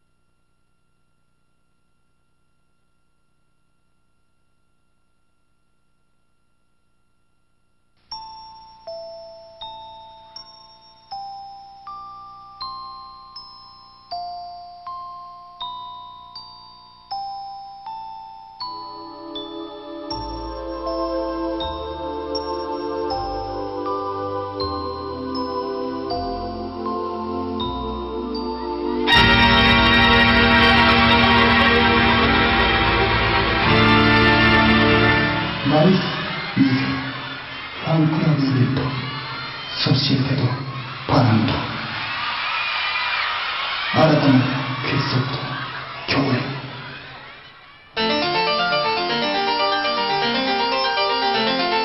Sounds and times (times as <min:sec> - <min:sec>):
Music: 0:08.1 - 0:51.8
Speech: 0:35.6 - 0:37.1, 0:37.8 - 0:39.2, 0:39.8 - 0:41.8, 0:44.0 - 0:46.8.